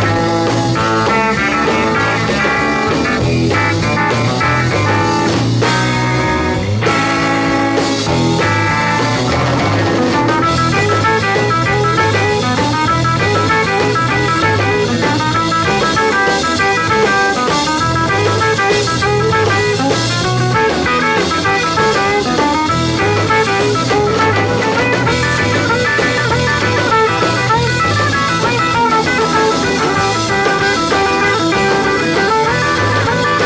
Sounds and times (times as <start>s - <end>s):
Bass guitar: 0.0s - 33.4s
Electric guitar: 0.0s - 33.4s.